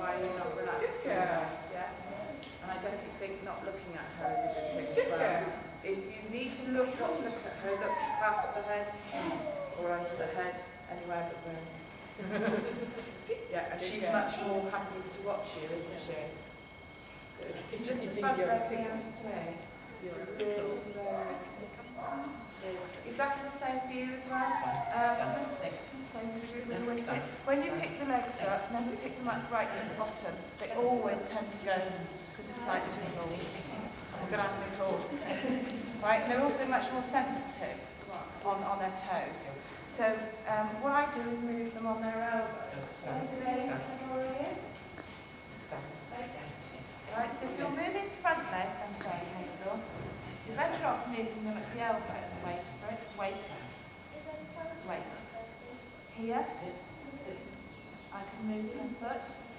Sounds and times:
Speech: 0.0 - 11.8, 17.4 - 44.7
Whimper (dog): 4.2 - 5.4, 7.0 - 10.1, 24.1 - 25.8.

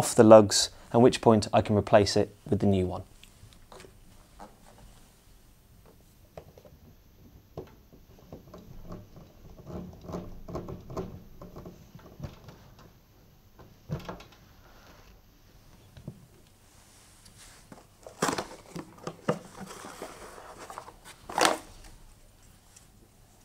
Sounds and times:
Inside, small room: 0.0 - 23.4.

